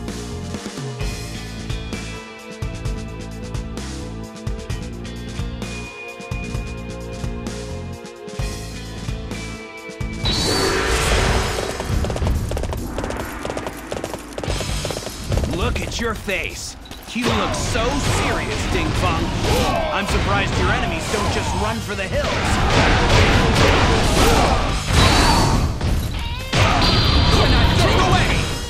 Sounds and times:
Speech: 15.5s - 22.8s, 26.6s - 28.5s.

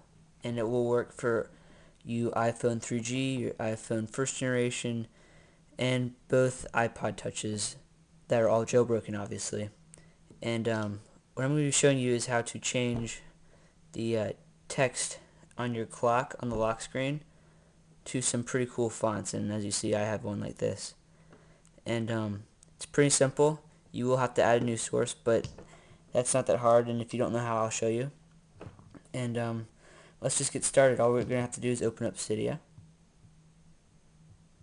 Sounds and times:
Speech: 0.0s - 5.2s, 5.8s - 9.8s, 10.4s - 13.3s, 14.0s - 17.3s, 18.0s - 21.0s, 21.8s - 28.2s, 29.0s - 32.7s.

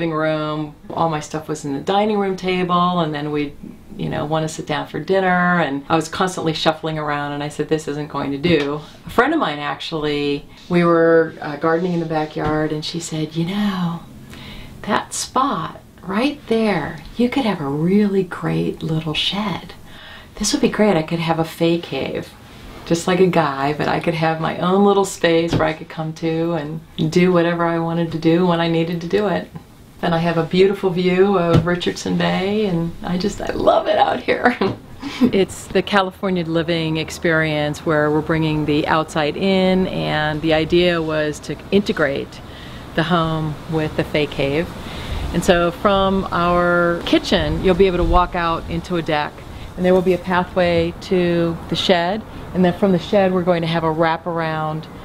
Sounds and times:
Speech: 0.0s - 14.1s, 14.8s - 19.8s, 20.4s - 42.4s, 43.0s - 44.7s, 45.3s - 54.9s.

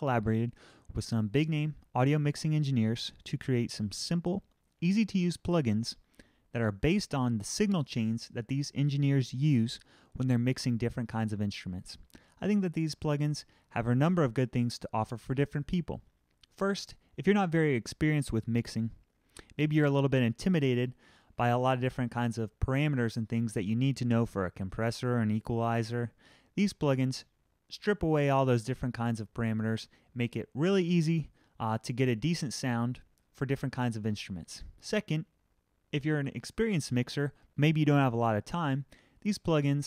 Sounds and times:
Speech: 0.0s - 35.3s, 35.9s - 39.8s.

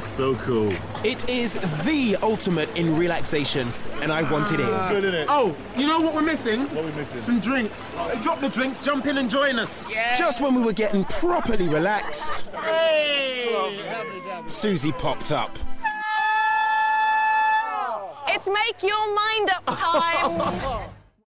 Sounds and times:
Water: 0.0s - 21.2s.

